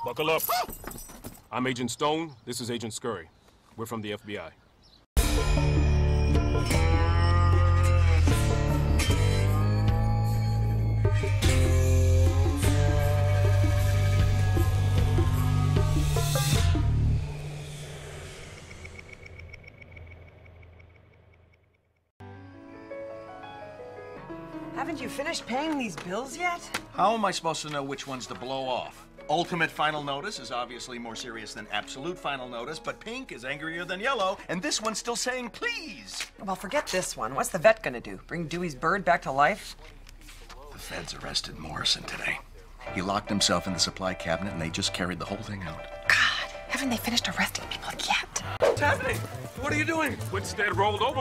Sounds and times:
Music: 0:05.2 - 0:18.6, 0:22.2 - 0:37.2, 0:42.8 - 0:51.2.

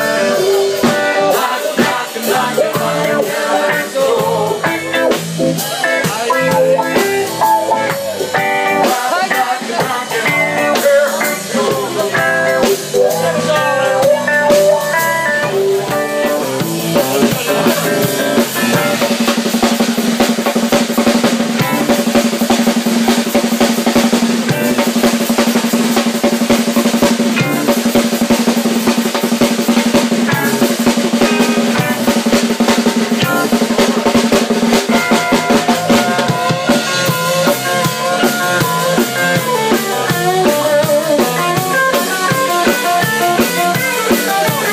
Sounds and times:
Drum kit: 0:00.0 - 0:44.7
Snare drum: 0:16.2 - 0:44.7.

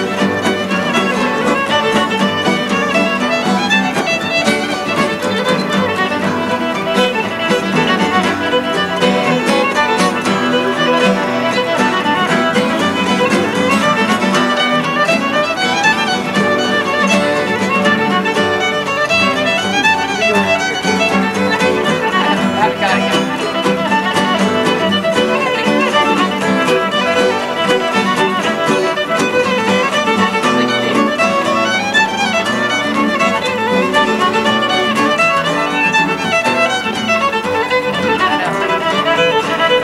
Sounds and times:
Violin, fiddle: 0:00.0 - 0:39.8.

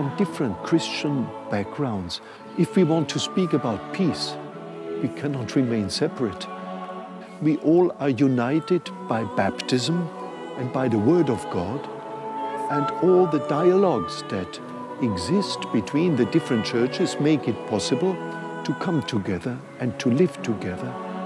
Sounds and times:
Speech: 0:00.0 - 0:04.4, 0:05.0 - 0:06.5, 0:07.4 - 0:11.9, 0:12.6 - 0:21.0
Music: 0:00.0 - 0:21.2.

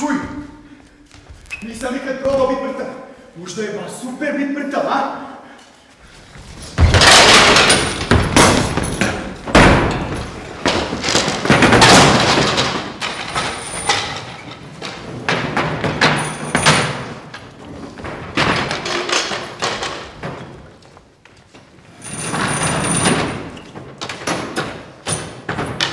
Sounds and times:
Thump, thud: 0:06.8 - 0:12.7.

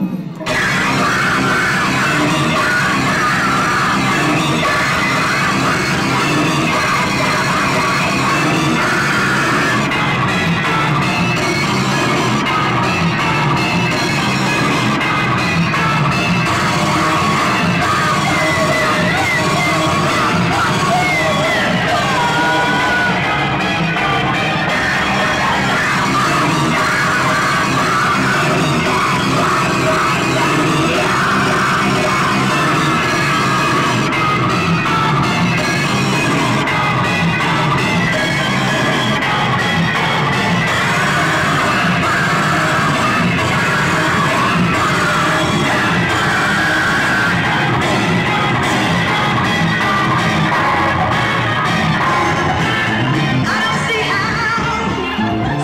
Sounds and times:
Cacophony: 0:00.0 - 0:55.6
Music: 0:00.0 - 0:55.6.

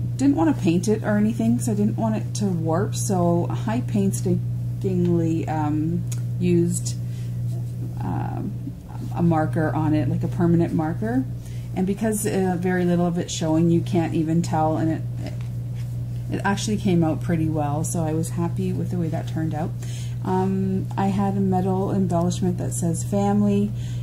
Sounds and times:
Inside, small room: 0:00.0 - 0:24.0
Speech: 0:00.2 - 0:07.0, 0:08.0 - 0:15.4, 0:16.3 - 0:23.8.

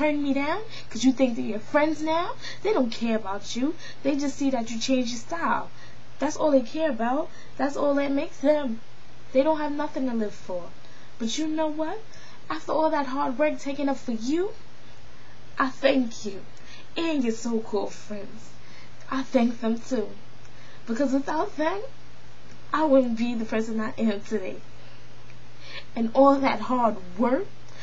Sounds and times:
Narration, monologue: 0:00.0 - 0:27.8.

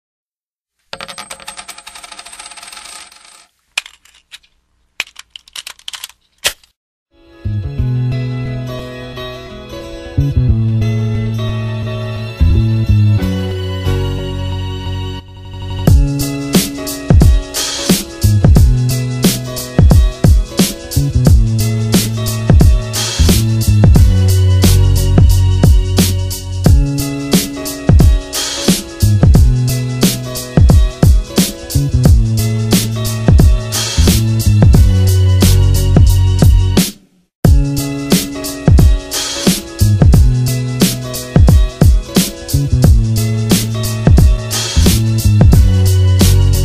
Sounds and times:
Music: 0:07.1 - 0:46.6.

